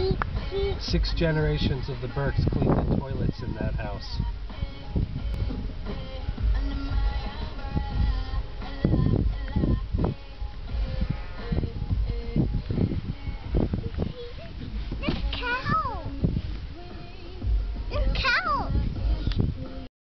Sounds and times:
Music: 0:00.0 - 0:19.9.

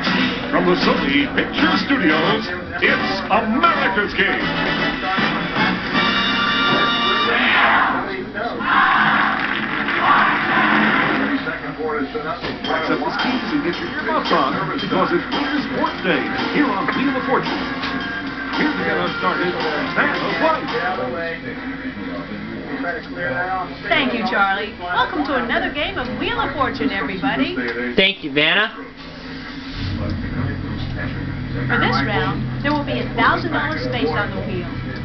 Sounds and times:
Music: 0:00.0 - 0:08.3, 0:09.0 - 0:23.7, 0:28.7 - 0:35.0.

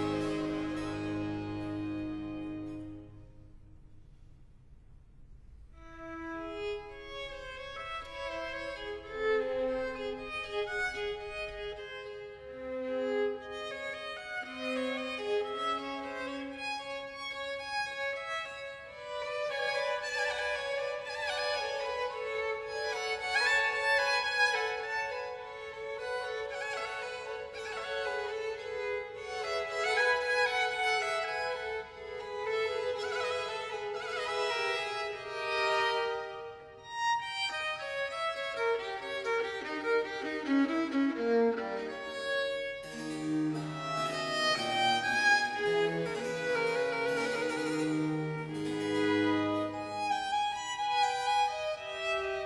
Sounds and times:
Violin, fiddle: 0:00.0 - 0:03.3, 0:05.8 - 0:52.4.

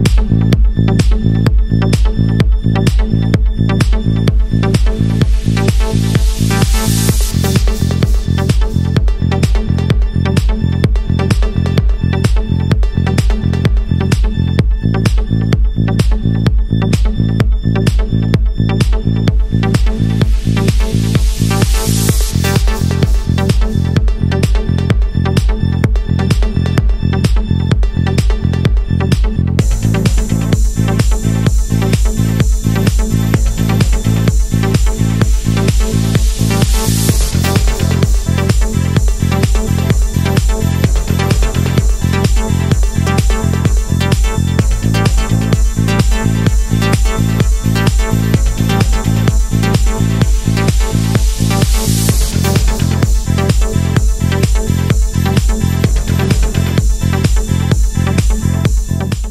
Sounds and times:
Disco: 0:00.0 - 0:59.3
Pop music: 0:00.0 - 0:59.3.

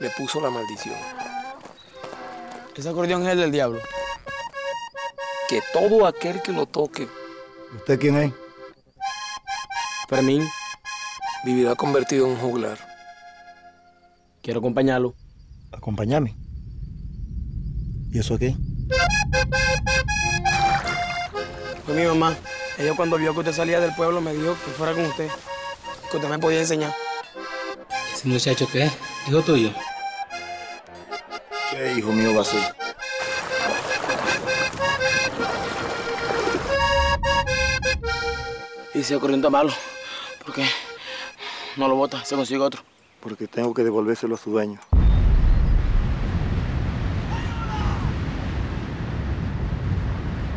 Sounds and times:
Music: 0:00.0 - 0:14.4, 0:18.9 - 0:42.7.

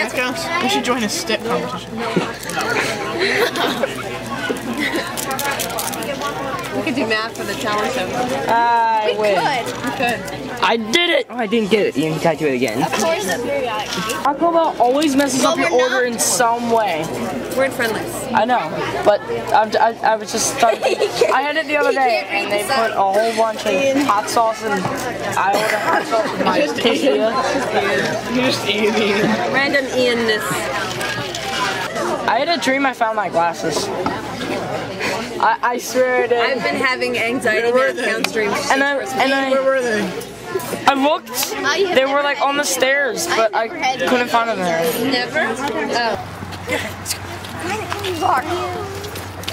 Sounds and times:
Chatter: 0:00.0 - 0:49.5
Inside, public space: 0:00.0 - 0:49.5.

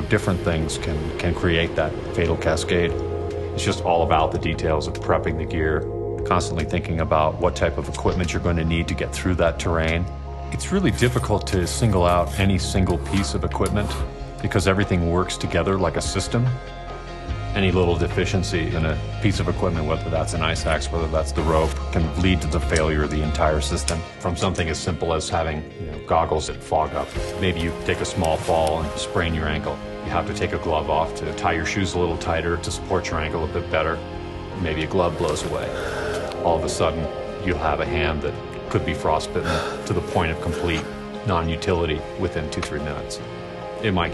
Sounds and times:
Speech: 0:00.0 - 0:03.0, 0:03.6 - 0:16.6, 0:17.5 - 0:34.0, 0:34.6 - 0:35.8, 0:36.4 - 0:43.2, 0:43.8 - 0:44.1
Music: 0:00.0 - 0:44.1.

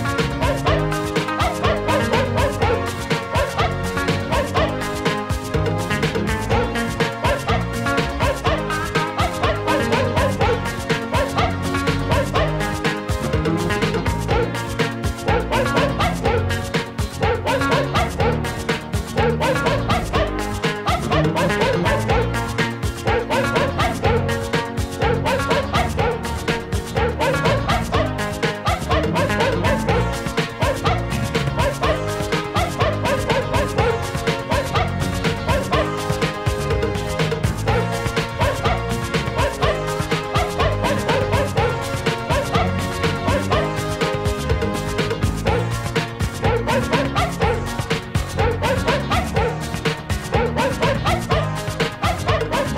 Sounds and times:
Bow-wow: 0:00.0 - 0:52.7
Music: 0:00.0 - 0:52.7.

